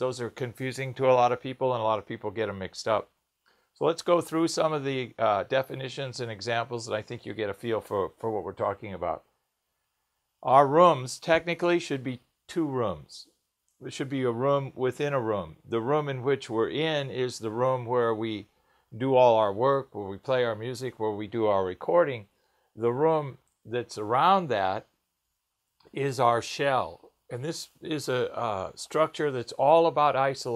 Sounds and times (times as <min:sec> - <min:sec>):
Speech: 0:00.0 - 0:03.2, 0:03.8 - 0:09.3, 0:10.4 - 0:24.9, 0:25.8 - 0:30.5.